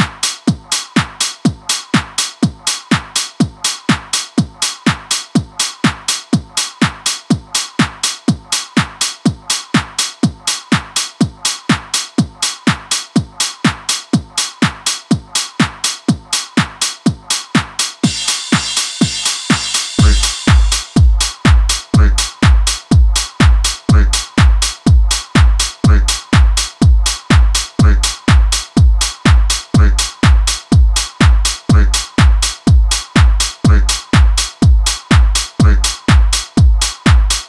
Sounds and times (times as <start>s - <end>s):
Music: 0.0s - 37.4s.